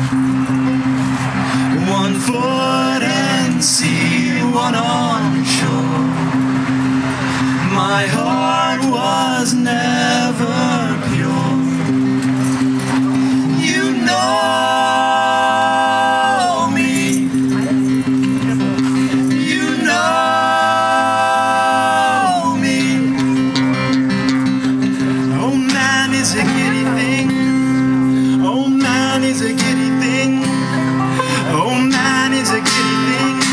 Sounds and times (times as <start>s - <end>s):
Music: 0.0s - 33.5s.